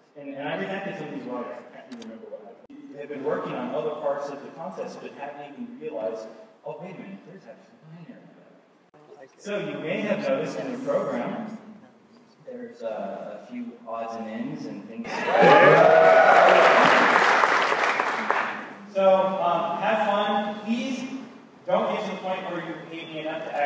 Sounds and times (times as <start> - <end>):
Male speech, man speaking: 0.0 - 7.7, 9.0 - 11.6, 12.4 - 15.8, 18.9 - 23.6.